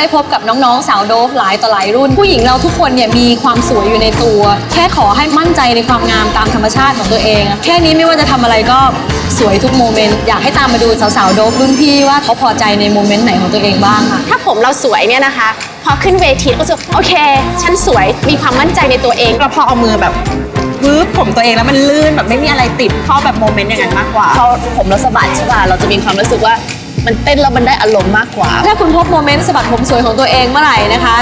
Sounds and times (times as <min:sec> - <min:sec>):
Speech: 0:00.0 - 0:20.2, 0:20.8 - 0:31.2
Music: 0:00.0 - 0:31.2.